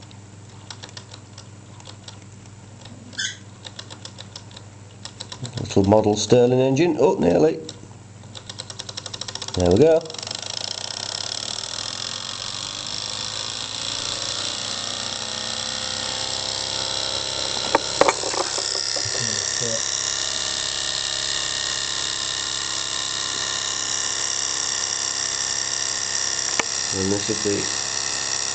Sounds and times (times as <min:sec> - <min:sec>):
Speech: 0:05.4 - 0:07.7, 0:09.6 - 0:10.2, 0:19.2 - 0:19.8, 0:26.9 - 0:27.8
Engine: 0:10.2 - 0:28.5.